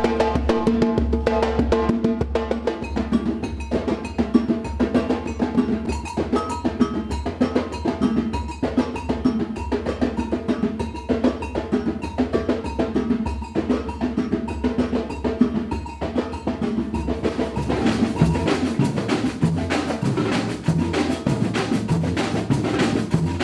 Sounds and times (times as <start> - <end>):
Drum: 0.0 - 23.4.